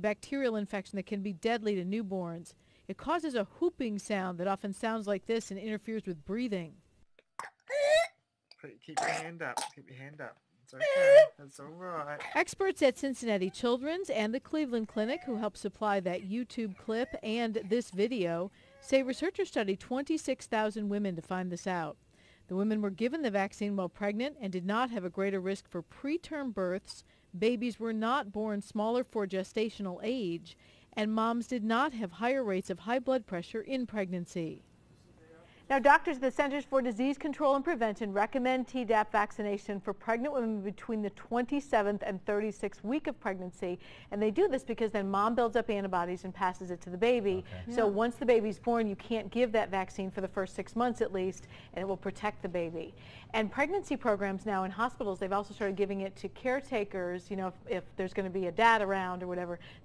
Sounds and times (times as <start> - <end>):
Speech: 0.0 - 6.7, 8.6 - 34.6, 35.2 - 59.6.